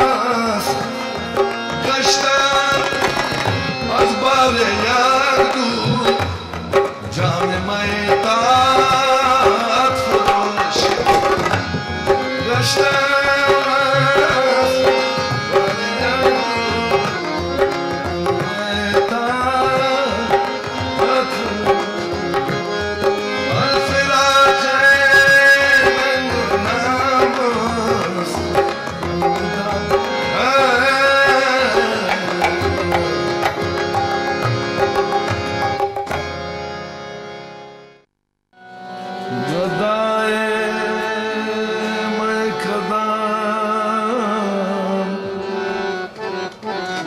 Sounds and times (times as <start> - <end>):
Carnatic music: 0.0 - 47.0.